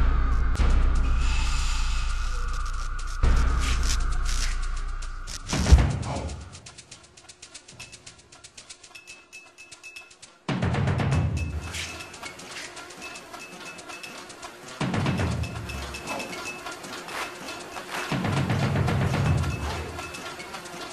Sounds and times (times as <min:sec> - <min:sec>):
Music: 0:00.0 - 0:20.9.